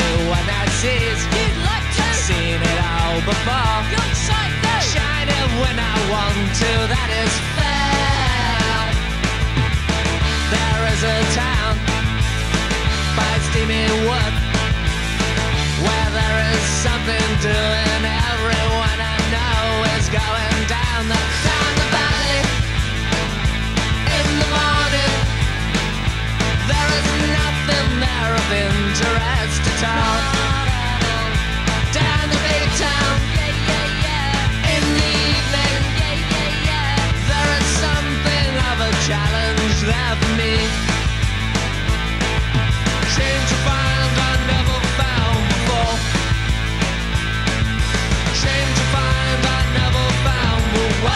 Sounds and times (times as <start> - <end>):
Music: 0.0 - 51.1.